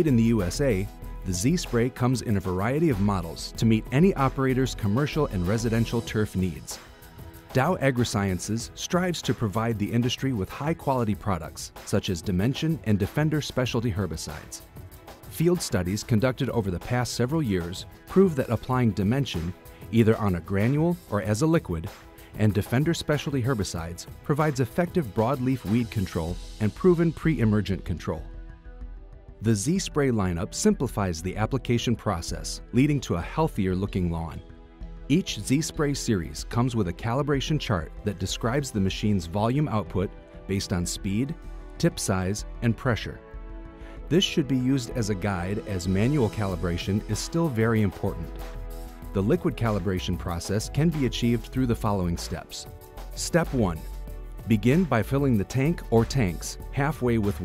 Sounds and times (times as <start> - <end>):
Speech: 0.0 - 6.8, 7.5 - 14.6, 15.3 - 28.3, 29.4 - 34.4, 35.1 - 43.2, 44.1 - 48.4, 49.1 - 57.4
Music: 0.0 - 57.4.